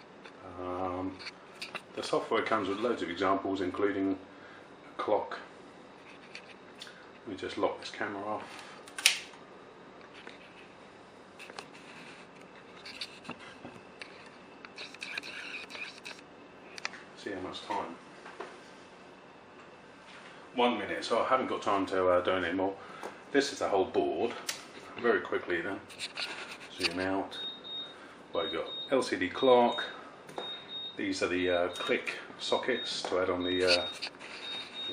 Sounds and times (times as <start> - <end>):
Speech: 0.4 - 1.2, 2.0 - 4.2, 5.0 - 5.5, 7.3 - 8.5, 17.2 - 18.0, 20.6 - 25.9, 26.7 - 27.4, 28.4 - 30.0, 31.0 - 34.0.